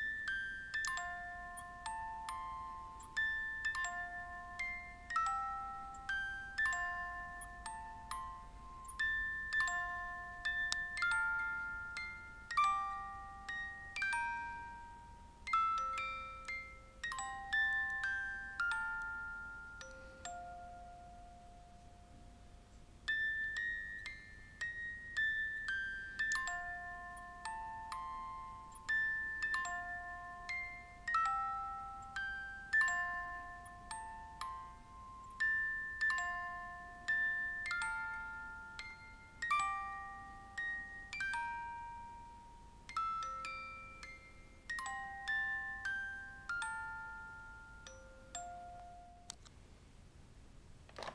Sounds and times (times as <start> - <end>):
Jingle (music): 0.0 - 21.6, 23.1 - 49.3.